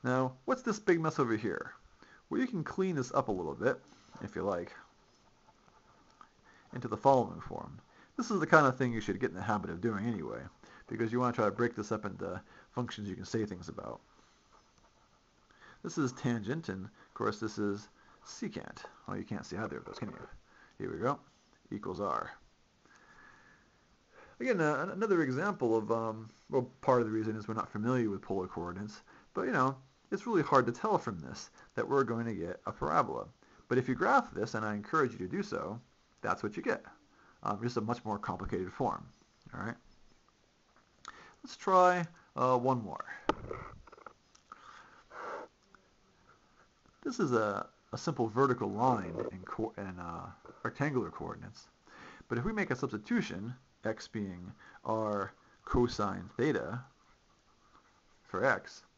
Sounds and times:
Speech: 0.0 - 4.9, 6.7 - 14.1, 15.8 - 22.4, 24.4 - 39.8, 41.4 - 43.3, 47.0 - 56.9, 58.2 - 58.9.

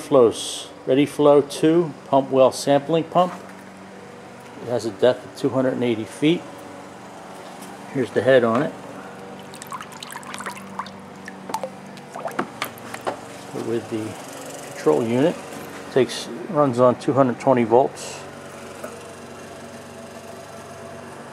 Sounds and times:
Water: 9.4 - 12.8
Pump (liquid): 9.4 - 13.1.

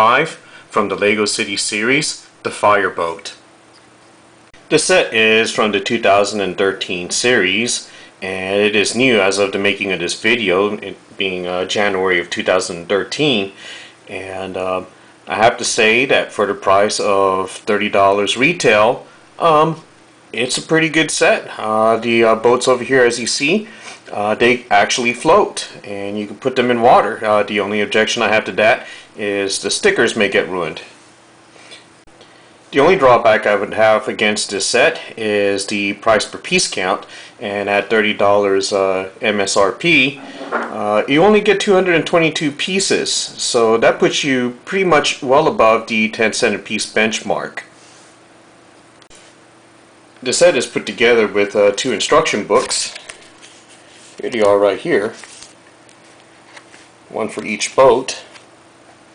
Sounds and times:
Speech: 0.0 - 3.4, 4.7 - 31.0, 32.7 - 47.7, 50.2 - 53.2, 54.2 - 55.3, 57.1 - 58.4.

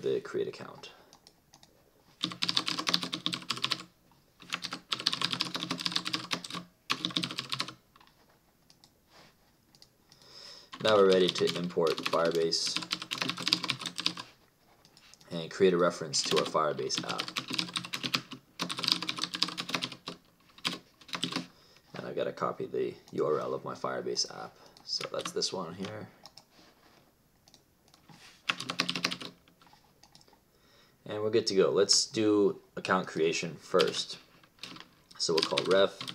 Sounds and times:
Typing: 1.2 - 8.1, 10.7 - 14.3, 16.2 - 21.5, 27.5 - 29.4, 30.0 - 30.3, 34.6 - 36.1.

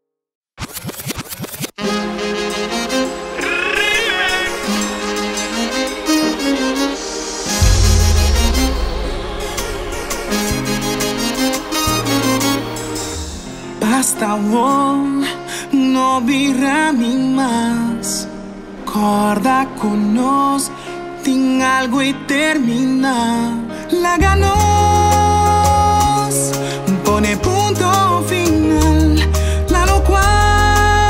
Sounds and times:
Music: 1.8 - 31.1.

